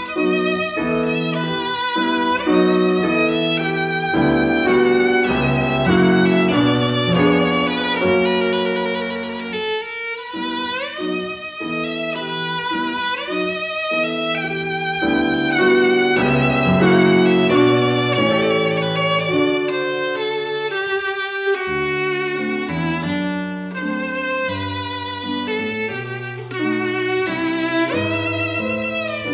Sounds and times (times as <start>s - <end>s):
Violin, fiddle: 0.0s - 29.3s.